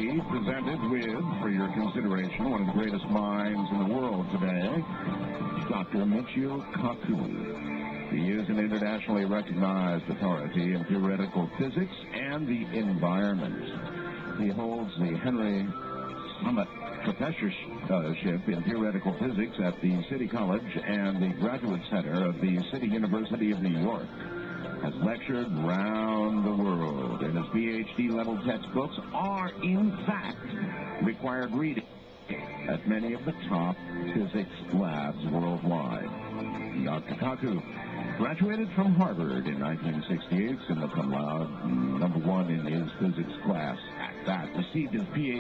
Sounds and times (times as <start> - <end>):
Speech: 0.0 - 4.9, 5.6 - 7.5, 8.1 - 13.8, 14.4 - 24.2, 24.8 - 36.1, 36.7 - 45.4
Music: 0.0 - 45.4.